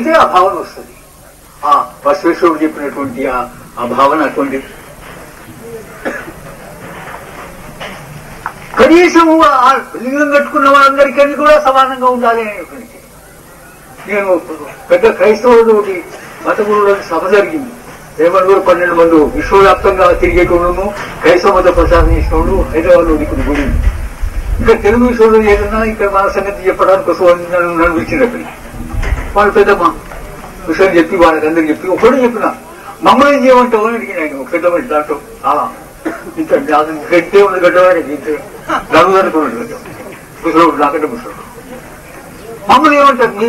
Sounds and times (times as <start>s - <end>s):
Male speech, man speaking: 0.0s - 1.0s, 1.6s - 4.8s, 8.8s - 13.1s, 14.0s - 23.8s, 24.6s - 28.6s, 29.3s - 30.0s, 30.6s - 41.5s, 42.5s - 43.4s
Narration, monologue: 0.0s - 43.4s.